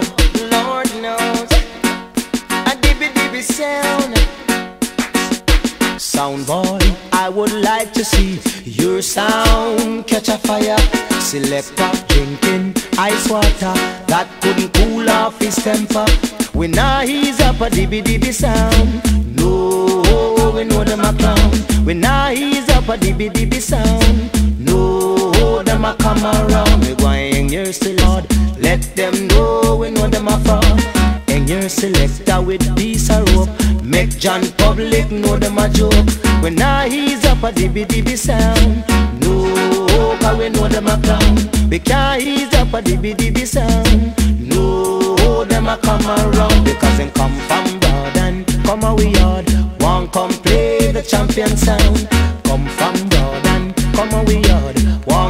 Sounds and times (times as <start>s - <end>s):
Music: 0.0s - 55.3s.